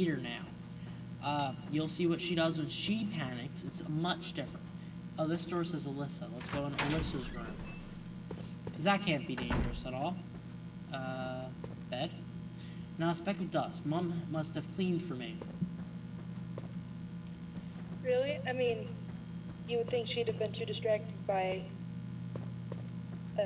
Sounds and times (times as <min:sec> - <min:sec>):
Speech: 0:01.2 - 0:04.6, 0:05.2 - 0:07.8, 0:08.8 - 0:10.2, 0:11.0 - 0:12.2, 0:13.0 - 0:15.4, 0:18.0 - 0:19.0, 0:19.7 - 0:21.7.